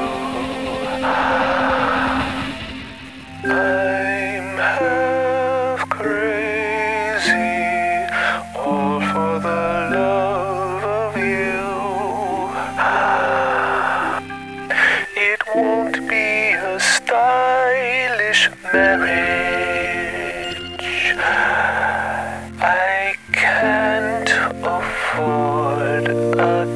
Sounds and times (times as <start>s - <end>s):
Music: 0.0s - 26.7s.